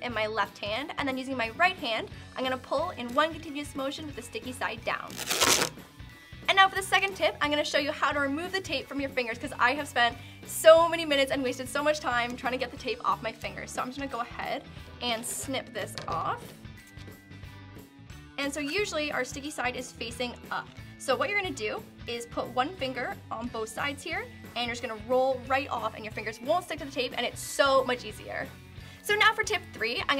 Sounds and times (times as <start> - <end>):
Speech: 0.0 - 5.1, 6.5 - 16.5, 18.4 - 28.5, 29.1 - 30.1
Music: 0.0 - 30.1.